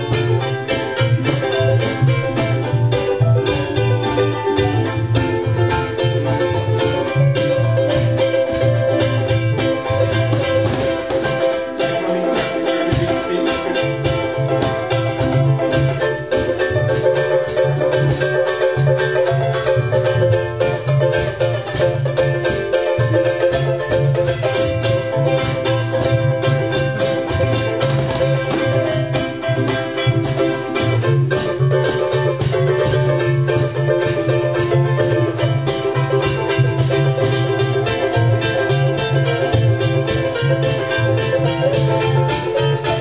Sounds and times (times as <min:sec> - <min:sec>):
Ukulele: 0:00.0 - 0:43.0.